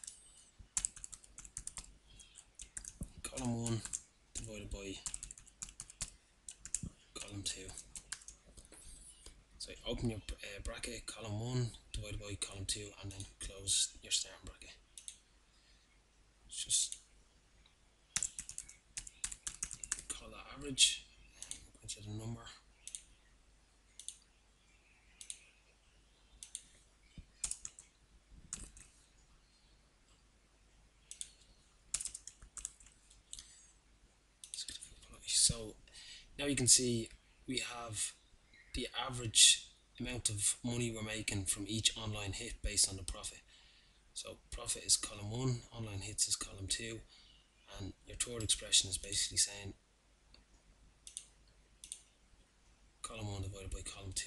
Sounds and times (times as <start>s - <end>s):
Clicking: 15.0s - 15.2s, 24.0s - 24.2s, 25.2s - 25.4s, 26.4s - 26.7s, 31.1s - 31.4s, 51.1s - 52.0s.